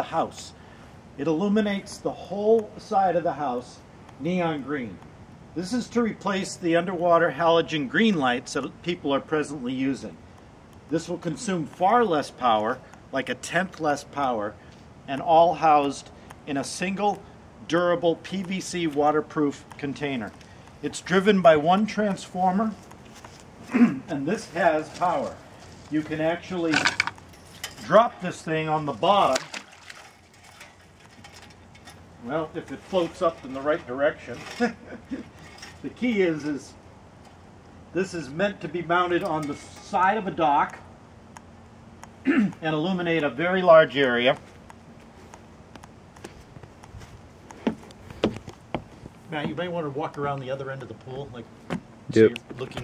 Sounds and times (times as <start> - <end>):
Speech: 0.0 - 0.6, 1.2 - 5.0, 5.6 - 10.2, 10.9 - 22.8, 23.8 - 27.0, 27.8 - 29.6, 32.2 - 34.8, 35.8 - 36.8, 38.0 - 40.8, 42.3 - 44.4, 49.3 - 51.5, 52.1 - 52.8.